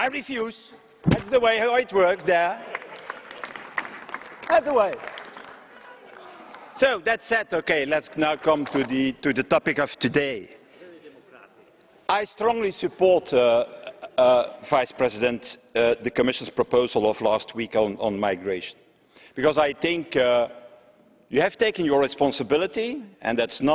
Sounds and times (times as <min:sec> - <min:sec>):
Male speech, man speaking: 0:00.0 - 0:02.6, 0:04.5 - 0:05.0, 0:06.8 - 0:18.8, 0:19.4 - 0:20.5, 0:21.3 - 0:23.7
Narration, monologue: 0:00.0 - 0:05.8, 0:06.6 - 0:23.7.